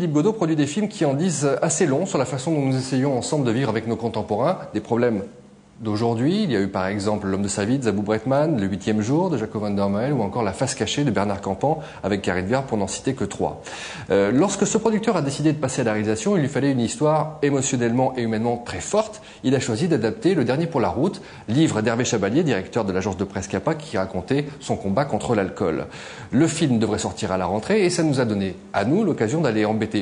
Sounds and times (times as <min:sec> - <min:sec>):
Speech: 0:00.0 - 0:30.0.